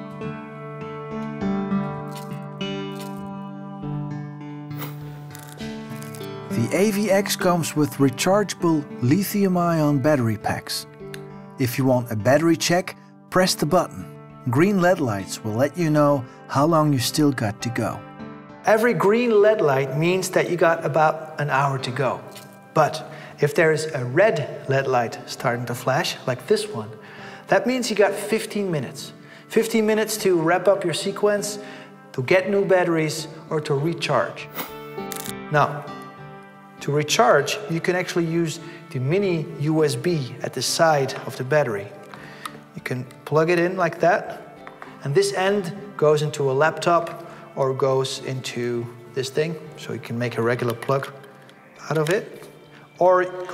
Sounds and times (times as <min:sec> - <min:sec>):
Music: 0:00.0 - 0:53.5
Speech: 0:06.5 - 0:10.9, 0:11.6 - 0:18.0, 0:18.7 - 0:31.6, 0:32.2 - 0:34.5, 0:35.5 - 0:35.8, 0:36.8 - 0:42.0, 0:42.8 - 0:44.4, 0:45.0 - 0:51.2, 0:51.8 - 0:52.4, 0:53.0 - 0:53.5.